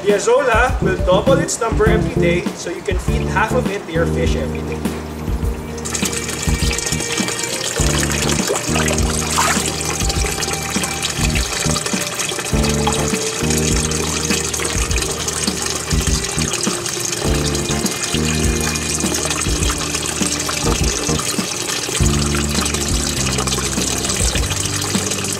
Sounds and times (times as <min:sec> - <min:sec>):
Music: 0:00.0 - 0:25.3
Pump (liquid): 0:05.5 - 0:25.3.